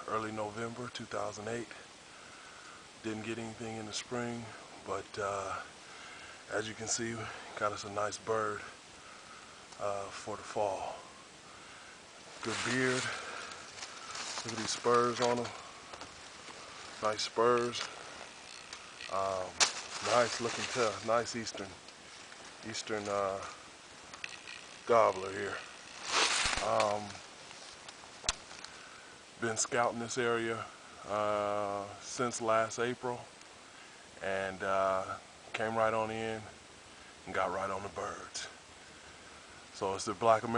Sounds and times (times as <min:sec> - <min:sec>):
Speech: 0:00.0 - 0:01.8, 0:03.0 - 0:05.7, 0:06.5 - 0:08.8, 0:09.8 - 0:11.1, 0:12.4 - 0:13.3, 0:14.4 - 0:15.6, 0:17.0 - 0:18.0, 0:19.1 - 0:21.8, 0:22.6 - 0:23.6, 0:24.9 - 0:25.7, 0:26.6 - 0:27.2, 0:29.4 - 0:33.3, 0:34.2 - 0:36.6, 0:37.2 - 0:38.6, 0:39.8 - 0:40.5.